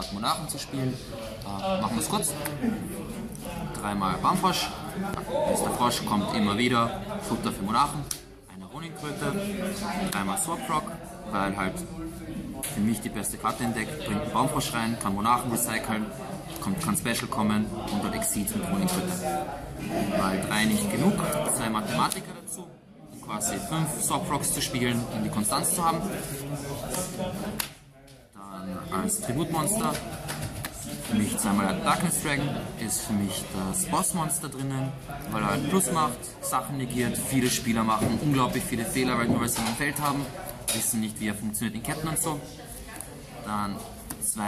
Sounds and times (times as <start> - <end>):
Speech: 0.0 - 44.4.